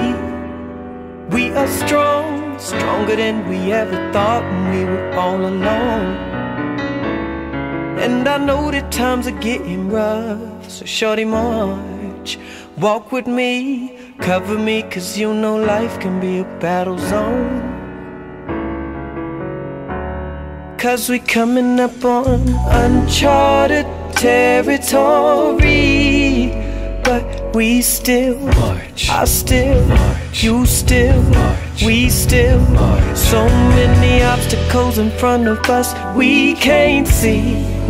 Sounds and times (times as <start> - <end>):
Music: 0.0 - 37.8.